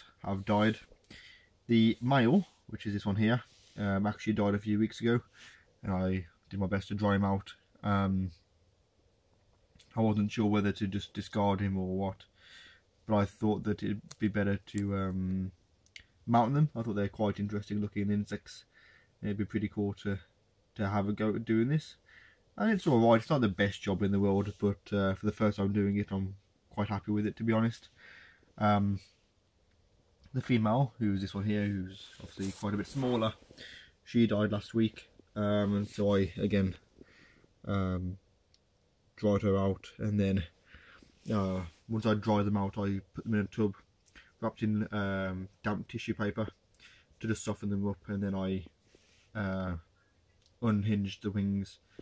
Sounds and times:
Speech: 0.0s - 0.9s, 1.7s - 8.4s, 9.8s - 12.3s, 13.0s - 15.6s, 16.2s - 22.0s, 22.6s - 27.9s, 28.6s - 29.1s, 30.3s - 33.4s, 34.0s - 36.8s, 37.6s - 38.2s, 39.2s - 40.6s, 41.2s - 46.6s, 47.2s - 48.7s, 49.3s - 49.9s, 50.5s - 51.8s.

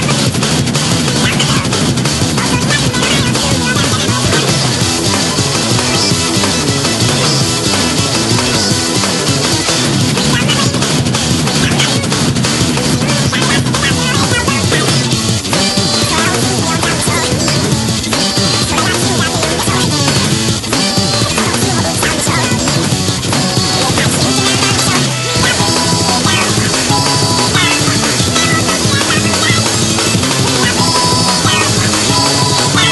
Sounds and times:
Music: 0.0s - 32.9s.

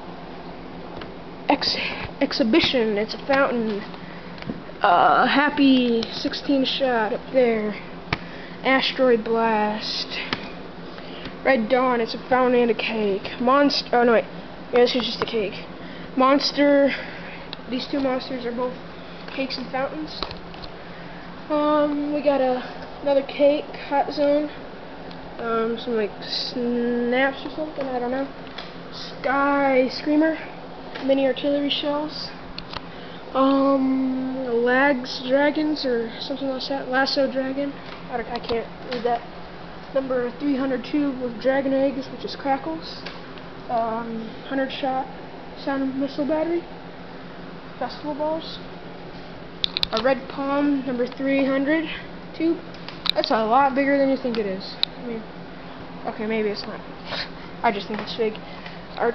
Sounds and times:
Speech: 1.5s - 3.9s, 4.8s - 7.8s, 8.6s - 10.4s, 11.4s - 17.0s, 17.7s - 18.8s, 19.4s - 20.4s, 21.5s - 24.6s, 25.4s - 28.3s, 28.9s - 32.4s, 33.4s - 39.3s, 39.9s - 43.1s, 43.7s - 46.7s, 47.8s - 48.7s, 49.9s - 52.6s, 53.2s - 55.3s, 56.0s - 58.4s.

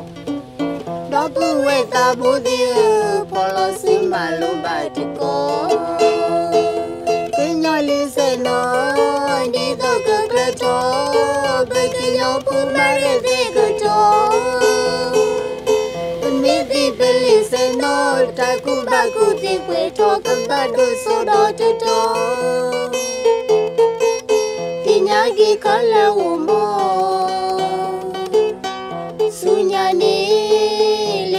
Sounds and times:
Pizzicato: 0.0s - 31.3s
Zither: 0.0s - 31.3s.

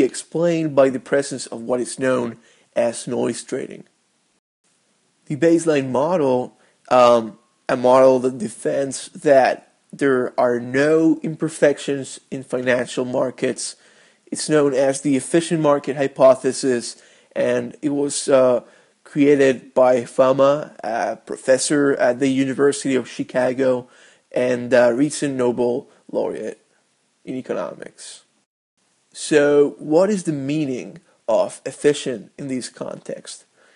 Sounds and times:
Speech: 0.0s - 3.9s, 5.3s - 26.6s, 27.3s - 28.3s, 29.2s - 33.5s.

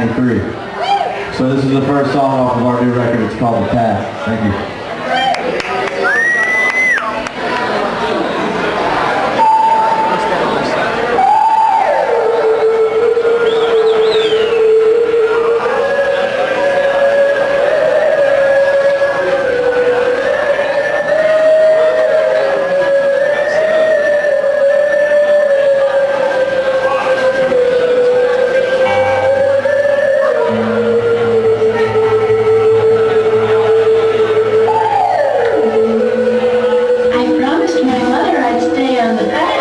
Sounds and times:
Music: 9.3s - 39.6s.

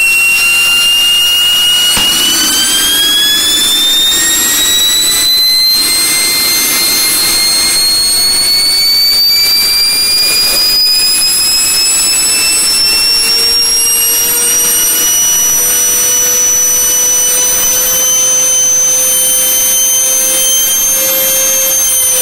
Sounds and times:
Steam whistle: 0.0s - 22.2s.

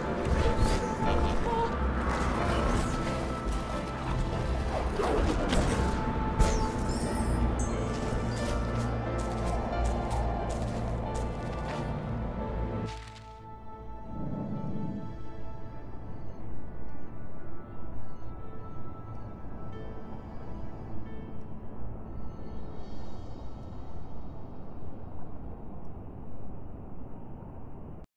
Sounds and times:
Music: 0.0s - 26.2s.

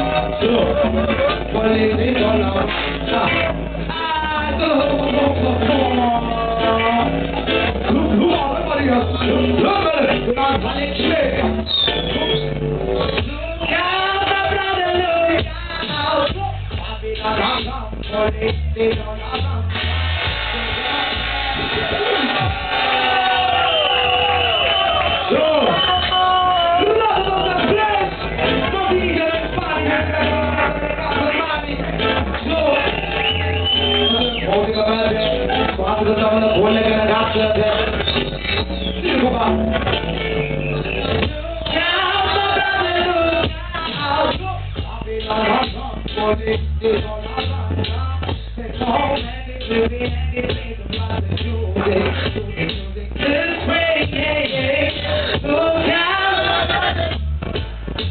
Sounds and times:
Music: 0.0s - 58.1s.

